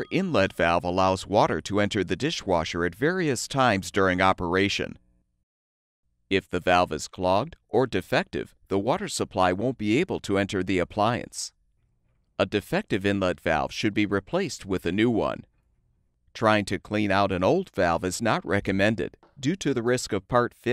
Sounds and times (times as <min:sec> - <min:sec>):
Speech: 0:00.0 - 0:05.0, 0:06.3 - 0:11.6, 0:12.4 - 0:15.5, 0:16.4 - 0:20.7.